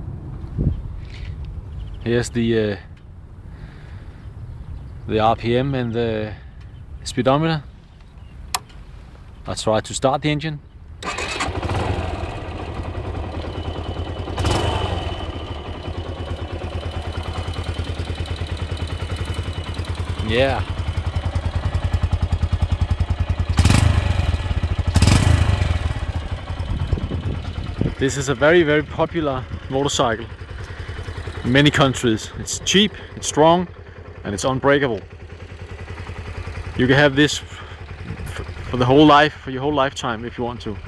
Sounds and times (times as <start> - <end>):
Vehicle: 0.0 - 40.8
Speech: 2.0 - 2.9, 5.1 - 6.4, 7.0 - 7.7, 9.5 - 10.6, 20.2 - 20.7, 28.0 - 30.3, 31.4 - 35.1, 36.8 - 37.6, 38.2 - 40.8
Idling: 11.0 - 40.8
Medium engine (mid frequency): 11.0 - 40.8
Accelerating, revving, vroom: 14.4 - 15.1, 23.6 - 24.2, 25.0 - 25.8.